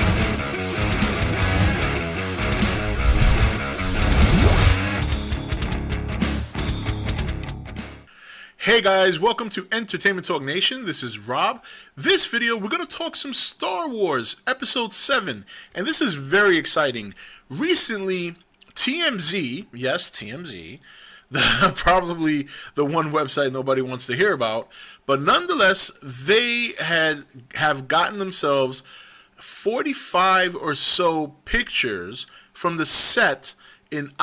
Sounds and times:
Speech: 8.6 - 20.8, 21.6 - 28.8, 29.4 - 34.2.

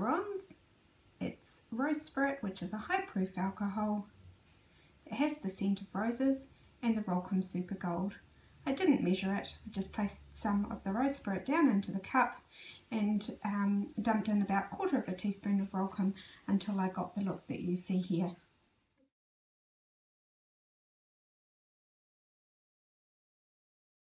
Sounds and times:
Speech: 0.0 - 0.6, 1.2 - 4.1, 5.1 - 18.4.

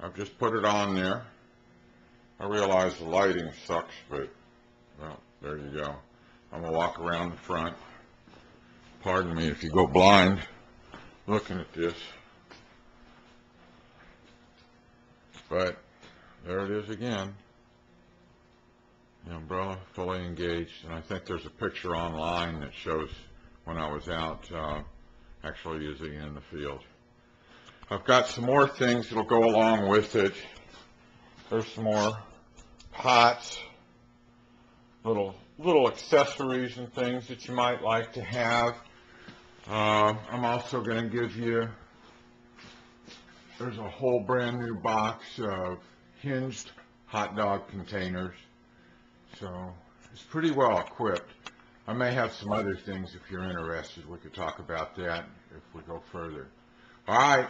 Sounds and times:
Speech: 0.0 - 1.4, 2.4 - 8.0, 9.0 - 10.6, 11.2 - 12.3, 15.4 - 17.5, 19.2 - 27.0, 27.9 - 30.6, 31.4 - 33.8, 35.0 - 38.9, 39.6 - 41.8, 43.5 - 48.5, 49.3 - 57.5.

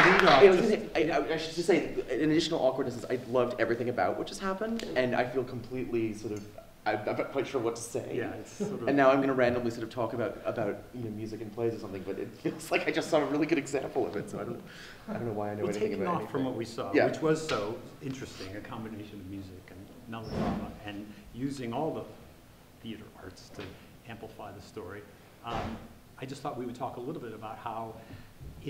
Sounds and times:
Speech: 0.0 - 22.2, 22.8 - 28.0.

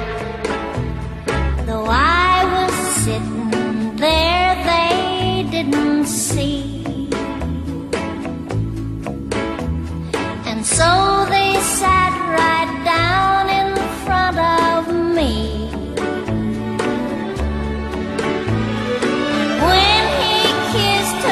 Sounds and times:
Music: 0.0 - 21.3.

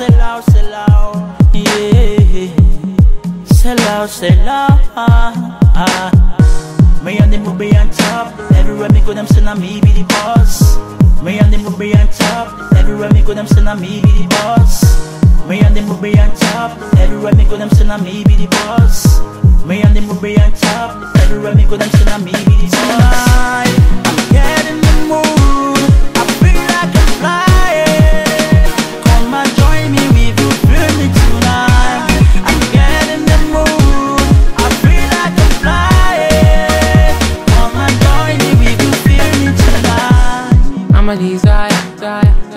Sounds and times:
Exciting music: 5.6 - 42.5.

